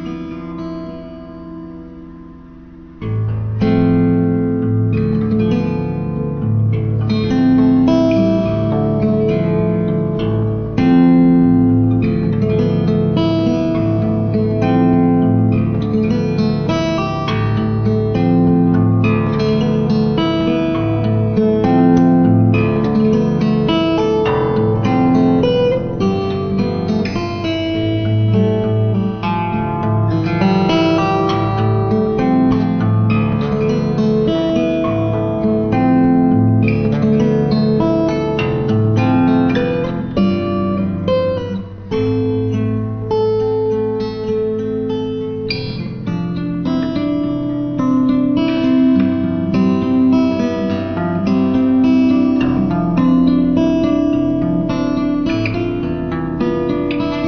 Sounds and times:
Strum: 0.0 - 57.2.

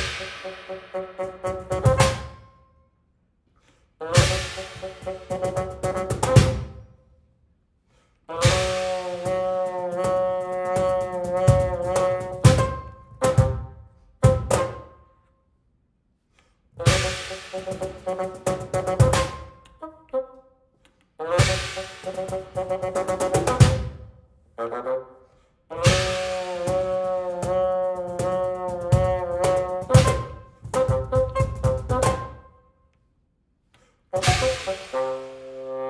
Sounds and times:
Percussion: 0.0 - 2.6, 4.1 - 7.0, 8.4 - 15.0, 16.8 - 19.9, 20.8 - 24.2, 25.7 - 32.6, 34.1 - 35.9.

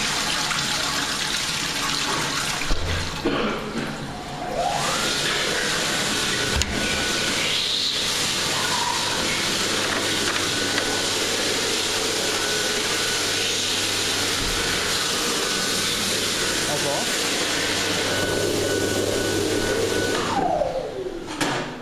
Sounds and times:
Toilet flush: 0.0 - 21.6.

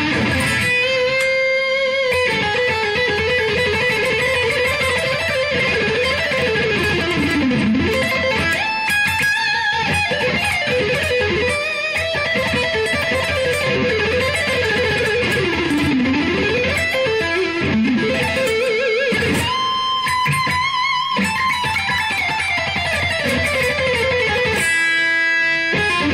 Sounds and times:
Tapping (guitar technique): 0.0 - 26.1.

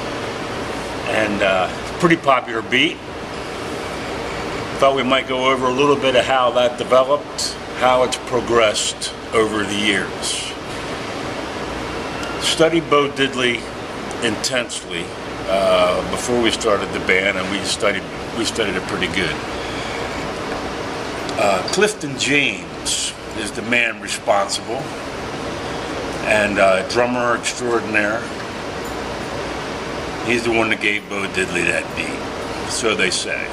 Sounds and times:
Speech: 1.0 - 3.0, 4.8 - 10.6, 12.4 - 19.5, 21.3 - 24.9, 26.2 - 28.4, 30.2 - 33.5.

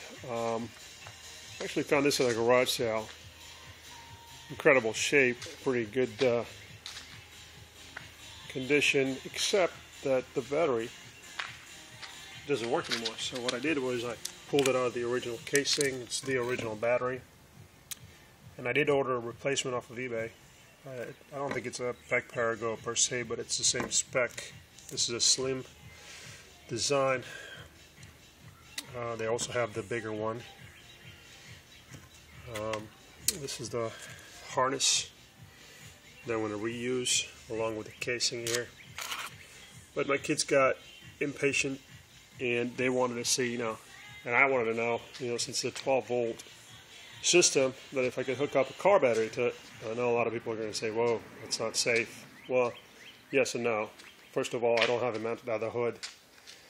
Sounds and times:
Speech: 0.2 - 0.7, 1.6 - 3.1, 4.6 - 6.5, 8.5 - 10.9, 12.5 - 17.2, 18.6 - 20.3, 20.9 - 25.7, 26.7 - 27.3, 28.8 - 30.5, 32.5 - 35.1, 36.3 - 38.7, 40.0 - 41.8, 42.4 - 46.4, 47.3 - 52.8, 53.4 - 56.0.

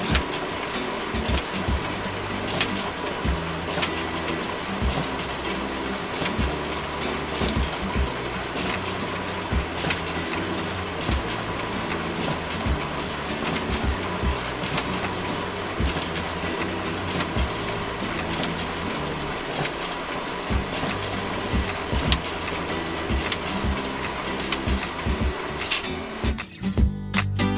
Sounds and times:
Printer: 0.0 - 26.4
Music: 0.0 - 27.5.

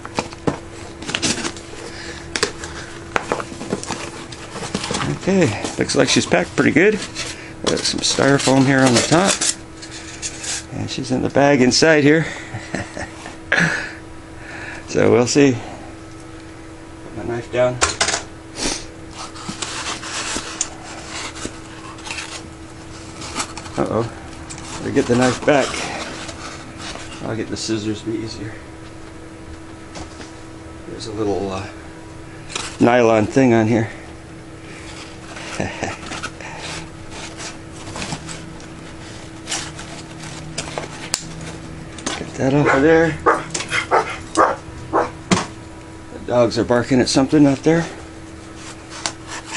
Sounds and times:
Speech: 5.0 - 7.0, 7.7 - 9.4, 10.7 - 12.3, 14.9 - 15.6, 17.0 - 17.8, 24.8 - 25.9, 27.2 - 28.6, 30.9 - 31.8, 32.8 - 33.9, 42.2 - 43.2, 46.1 - 48.0.

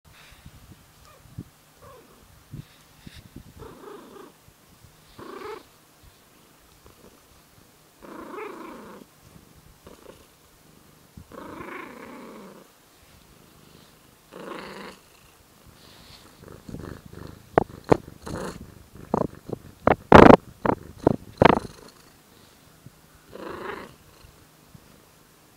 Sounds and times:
Purr: 1.8 - 2.2, 3.6 - 4.4, 5.1 - 5.7, 6.7 - 7.3, 8.0 - 12.7, 13.3 - 22.2, 23.3 - 24.4.

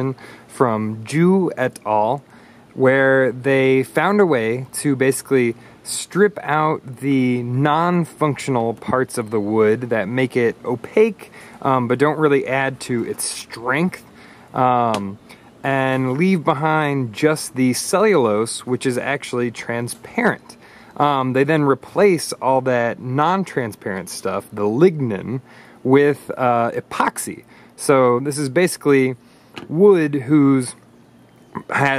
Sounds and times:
Speech: 0.0 - 30.8, 31.5 - 31.9.

